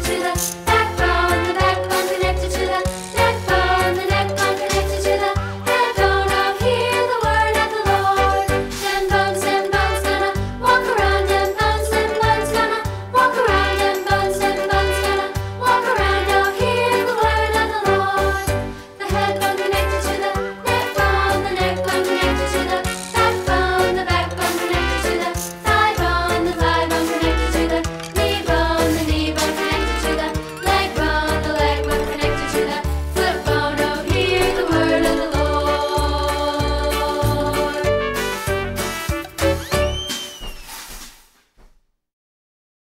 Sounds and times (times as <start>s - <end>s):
Music: 0.0s - 41.0s.